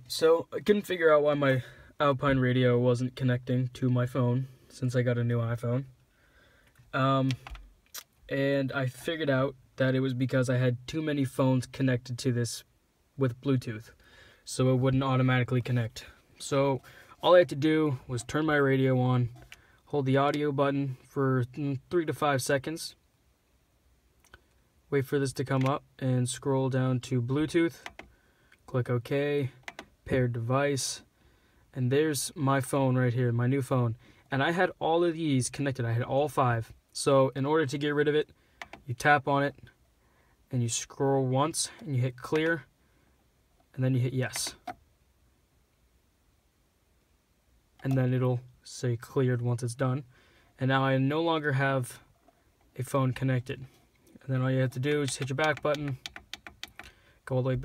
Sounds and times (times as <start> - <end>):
Speech: 0.1 - 5.9, 7.0 - 7.4, 8.3 - 13.9, 14.5 - 23.0, 24.9 - 27.8, 28.7 - 31.0, 31.8 - 38.3, 38.9 - 39.7, 40.5 - 42.7, 43.7 - 44.6, 47.8 - 52.0, 52.8 - 56.0, 57.3 - 57.6.